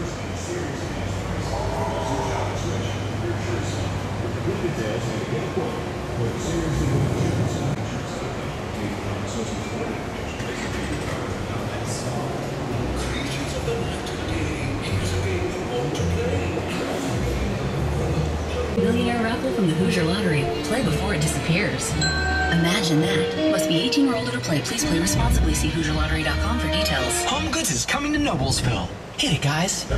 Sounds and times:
Speech: 0.0s - 29.9s.

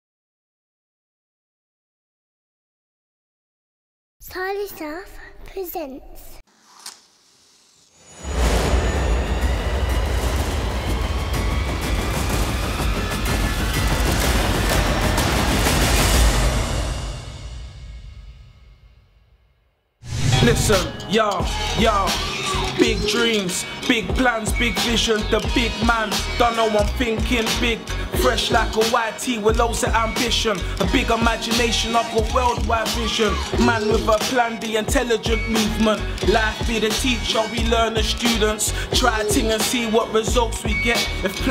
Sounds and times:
Speech: 4.2s - 6.4s, 20.3s - 21.2s
Silence: 6.5s - 13.0s, 15.6s - 21.0s
Music: 8.2s - 41.5s.

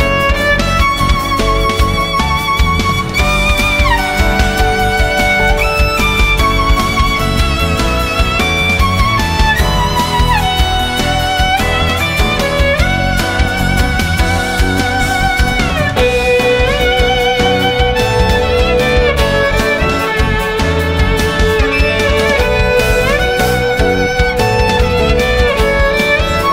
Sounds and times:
Violin, fiddle: 0.0s - 26.5s.

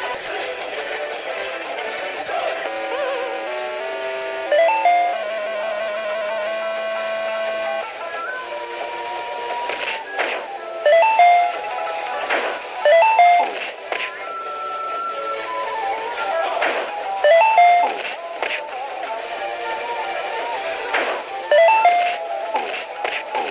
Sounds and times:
Music: 0.0s - 23.5s.

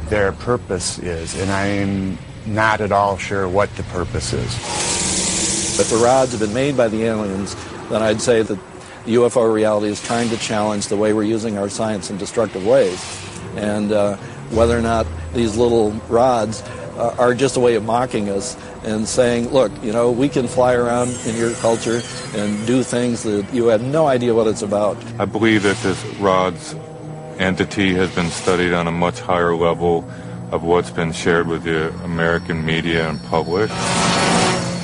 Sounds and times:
Speech: 0.0s - 4.6s, 5.8s - 26.8s, 27.4s - 33.7s
Outside, urban or manmade: 0.0s - 34.8s.

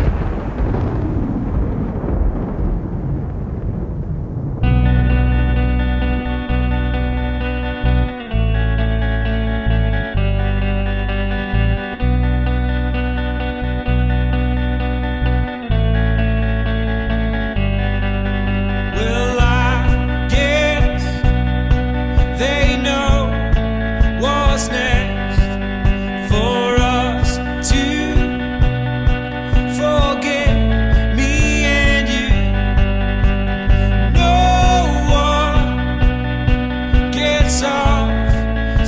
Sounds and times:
Country: 4.7s - 38.8s.

